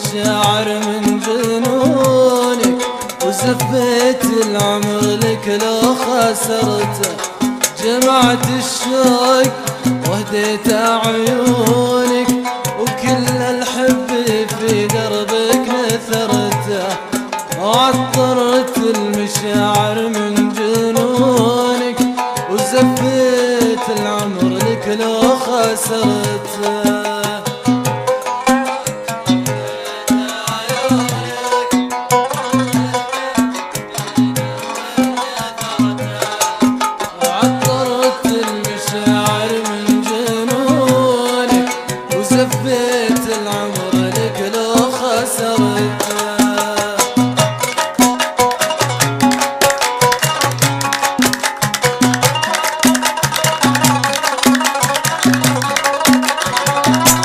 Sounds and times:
Middle Eastern music: 0.0s - 57.2s.

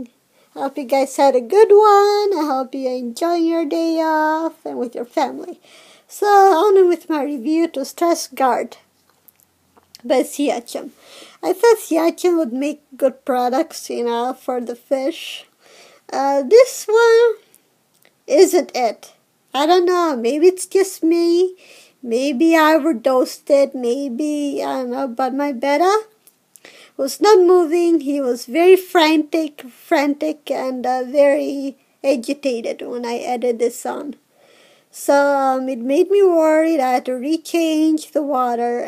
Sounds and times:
Speech: 0.0s - 8.9s, 10.0s - 15.5s, 16.1s - 17.4s, 18.3s - 26.2s, 27.0s - 34.2s, 35.0s - 38.8s.

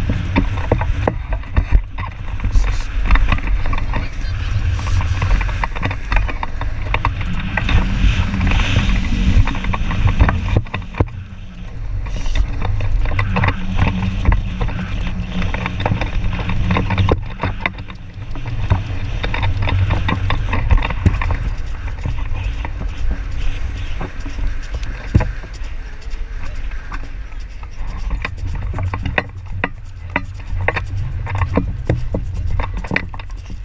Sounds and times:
Clip-clop: 0.0s - 33.6s.

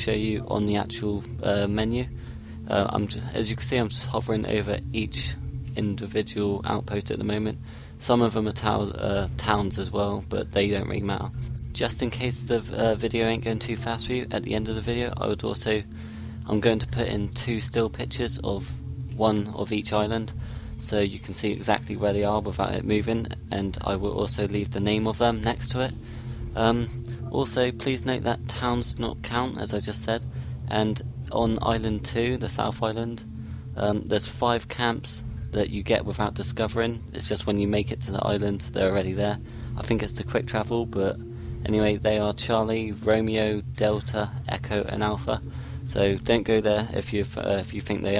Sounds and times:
Speech: 0.0s - 2.1s, 2.7s - 15.9s, 16.5s - 26.0s, 26.6s - 48.1s.

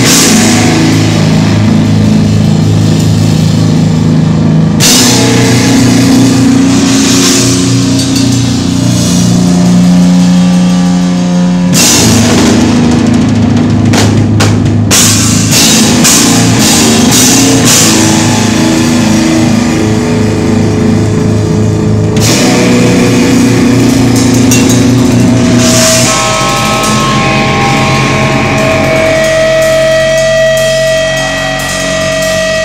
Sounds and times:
Music: 0.0s - 32.6s.

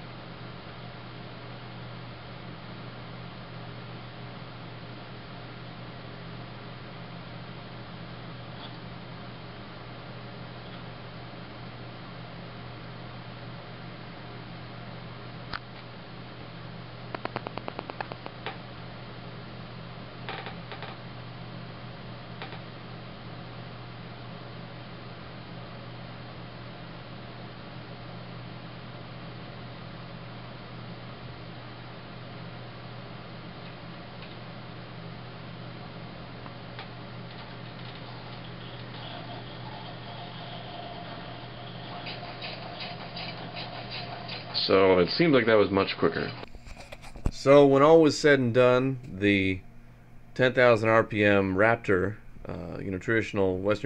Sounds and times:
Inside, small room: 0.0s - 53.8s
Speech: 44.6s - 46.4s, 47.3s - 49.6s, 50.4s - 53.8s.

